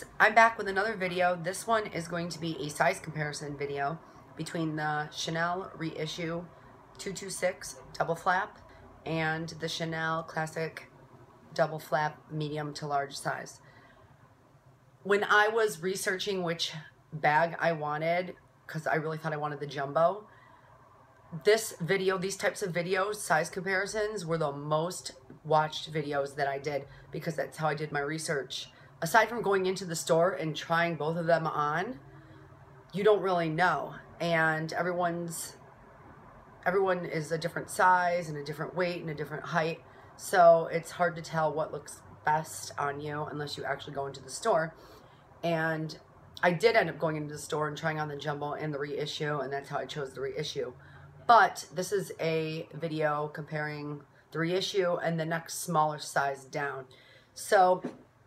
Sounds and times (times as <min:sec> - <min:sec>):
Speech: 0:00.0 - 0:10.9, 0:11.6 - 0:13.6, 0:15.1 - 0:20.2, 0:21.4 - 0:32.0, 0:33.0 - 0:35.6, 0:36.6 - 0:44.8, 0:45.4 - 0:58.0.